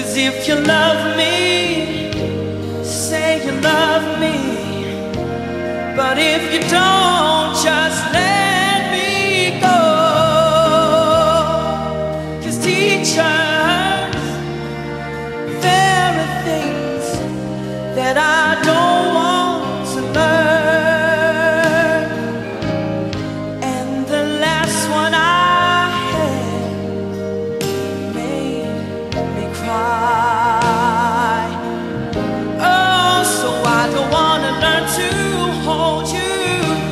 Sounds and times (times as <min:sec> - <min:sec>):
Singing: 0:00.0 - 0:14.6, 0:15.4 - 0:22.7, 0:27.6 - 0:36.9
Inside, large room or hall: 0:00.0 - 0:36.9
Music: 0:00.0 - 0:36.9.